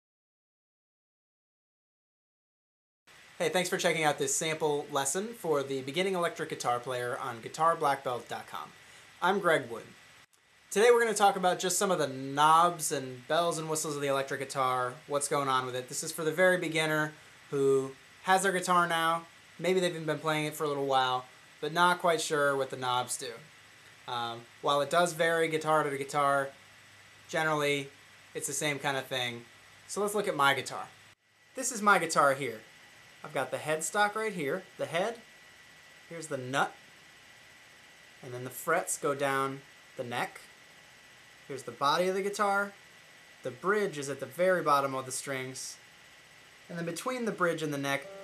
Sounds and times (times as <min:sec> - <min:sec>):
Speech: 0:03.4 - 0:10.0, 0:10.7 - 0:23.5, 0:24.1 - 0:26.6, 0:27.3 - 0:31.0, 0:31.6 - 0:32.6, 0:33.3 - 0:35.2, 0:36.1 - 0:36.8, 0:38.2 - 0:40.5, 0:41.5 - 0:42.8, 0:43.4 - 0:45.8, 0:46.7 - 0:48.2.